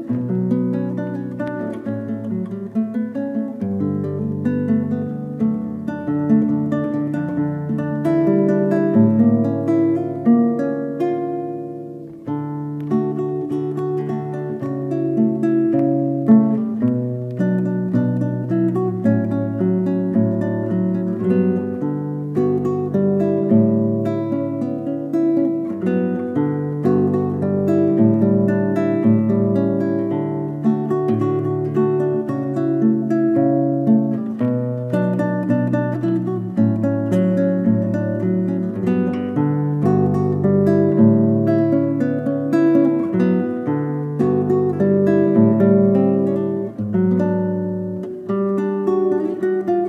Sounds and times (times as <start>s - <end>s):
Guitar: 0.0s - 49.8s.